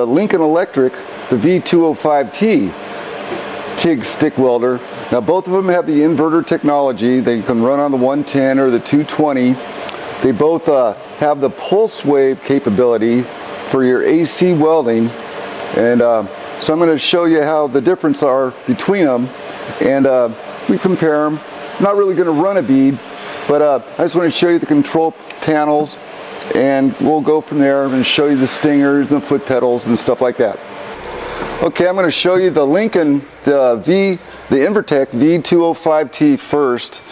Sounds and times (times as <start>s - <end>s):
Speech: 0.0s - 2.8s, 3.8s - 9.6s, 10.2s - 30.6s, 31.6s - 37.1s.